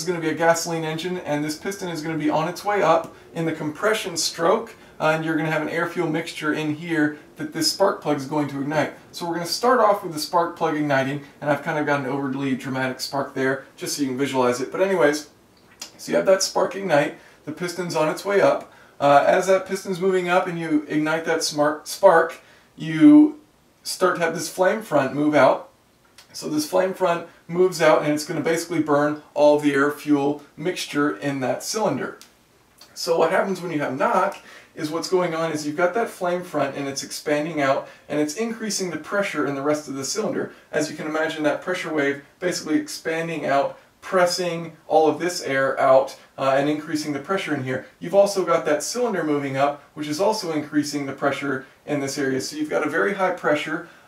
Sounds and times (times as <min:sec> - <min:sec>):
Speech: 0:00.0 - 0:54.0.